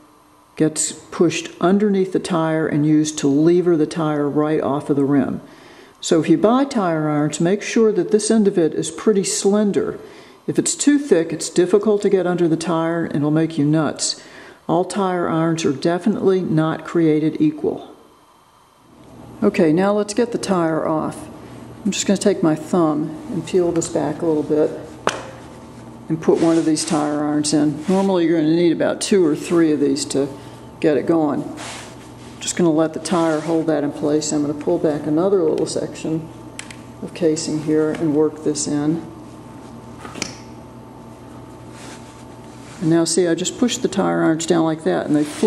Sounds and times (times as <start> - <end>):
Speech: 0.6 - 18.1, 19.4 - 25.0, 26.1 - 31.6, 32.4 - 36.3, 37.0 - 39.1, 42.8 - 45.4.